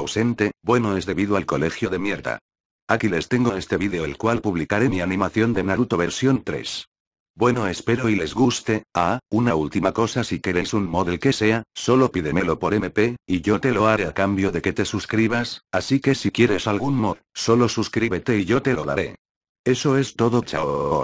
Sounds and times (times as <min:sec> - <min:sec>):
Speech: 0:00.0 - 0:21.0.